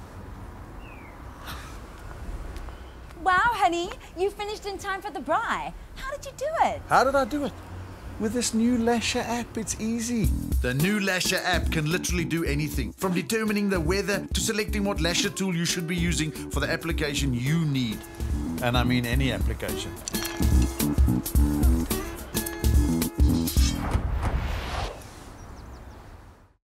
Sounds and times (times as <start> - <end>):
Music: 10.1 - 24.0
Speech: 18.6 - 20.0.